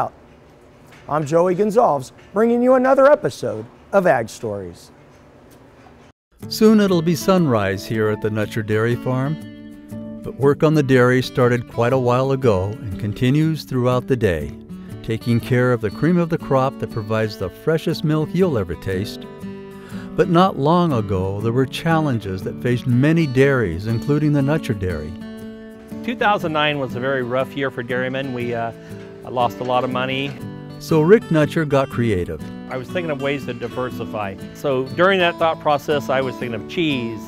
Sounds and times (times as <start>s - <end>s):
Speech: 1.1s - 4.9s, 6.5s - 9.4s, 10.3s - 19.2s, 20.2s - 25.2s, 26.0s - 28.7s, 29.3s - 37.2s
Music: 6.3s - 37.2s.